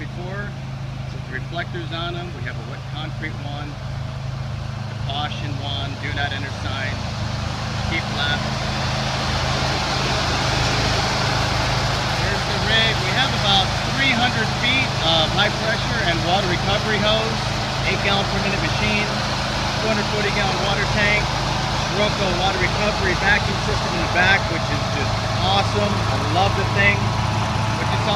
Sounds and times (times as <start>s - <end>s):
Speech: 0.0s - 3.8s, 5.1s - 7.0s, 7.9s - 8.7s, 9.6s - 11.4s, 12.2s - 19.2s, 19.8s - 21.3s, 21.9s - 27.2s, 27.8s - 28.1s.